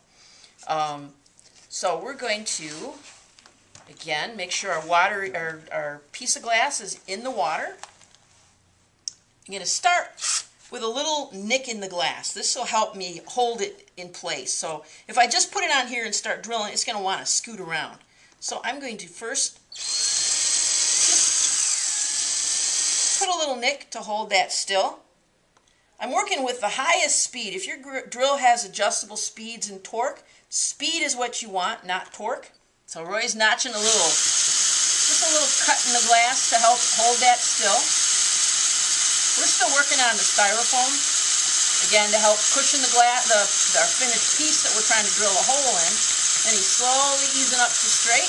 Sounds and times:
Drill: 10.2 - 10.5, 19.8 - 23.3, 33.7 - 48.2.

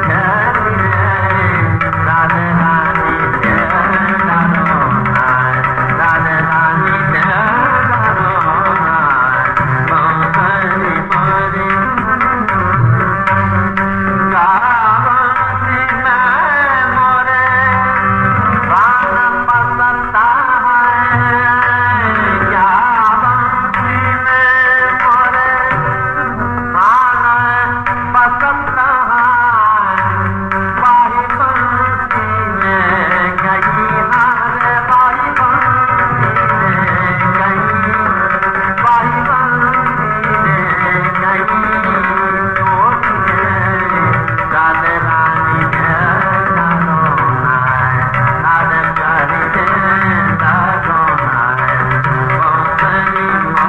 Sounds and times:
Inside, large room or hall: 0.0 - 53.6
Music: 0.0 - 53.6.

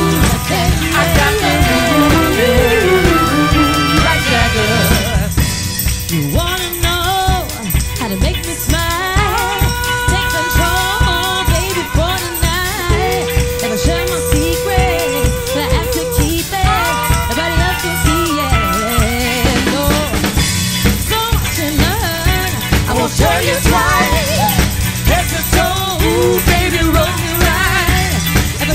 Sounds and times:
Dance music: 0.0 - 5.3, 22.3 - 28.1.

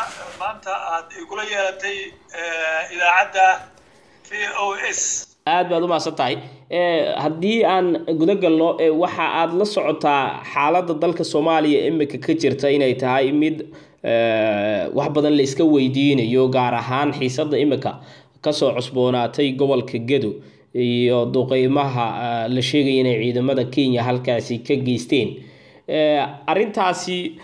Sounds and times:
Speech: 0.0 - 3.7, 4.3 - 27.4.

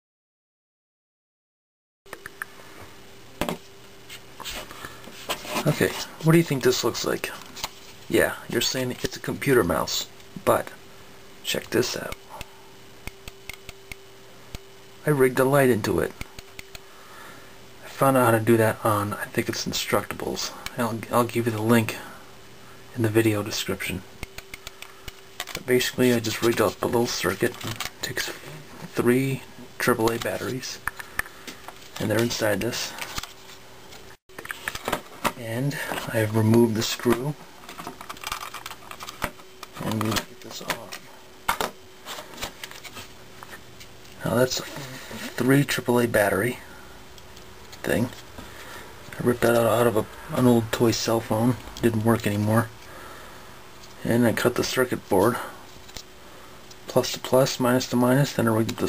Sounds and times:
Speech: 5.5 - 7.5, 8.1 - 10.8, 11.4 - 12.2, 15.0 - 16.2, 17.8 - 22.2, 22.9 - 24.1, 25.6 - 30.8, 32.0 - 33.0, 35.4 - 37.4, 39.8 - 41.1, 44.2 - 46.7, 47.8 - 48.2, 49.1 - 52.8, 54.0 - 55.6, 56.9 - 58.8.

